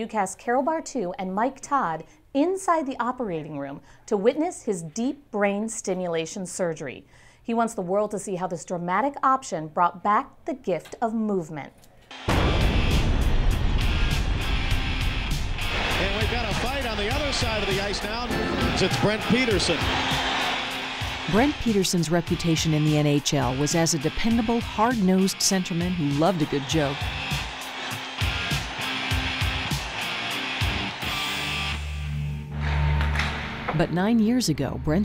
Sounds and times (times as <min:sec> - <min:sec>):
Speech: 0:00.0 - 0:11.8, 0:16.0 - 0:19.8, 0:21.3 - 0:27.0, 0:33.7 - 0:35.0
Music: 0:12.1 - 0:35.0.